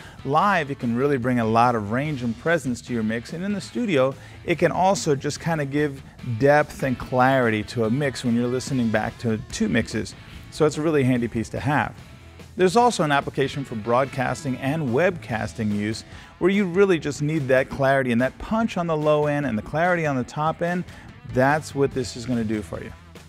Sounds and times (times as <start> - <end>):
Music: 0.0 - 23.2
Speech: 0.3 - 12.0, 12.6 - 23.0.